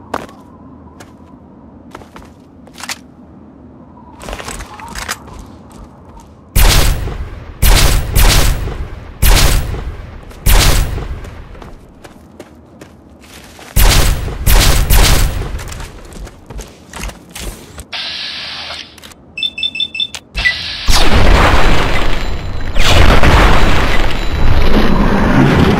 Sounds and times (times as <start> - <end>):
Outside, rural or natural: 0.0 - 25.7.